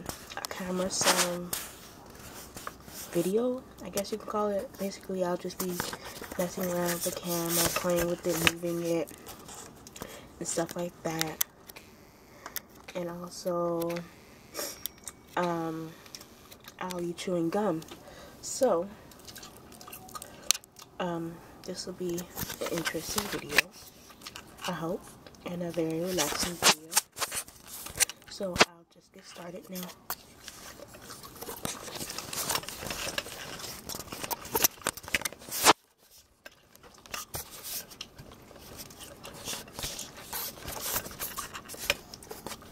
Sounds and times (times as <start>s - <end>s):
Speech: 0.4s - 1.6s, 3.1s - 9.1s, 10.4s - 11.4s, 12.9s - 14.1s, 15.4s - 16.0s, 16.8s - 19.0s, 21.0s - 23.8s, 24.6s - 27.0s, 28.3s - 30.0s.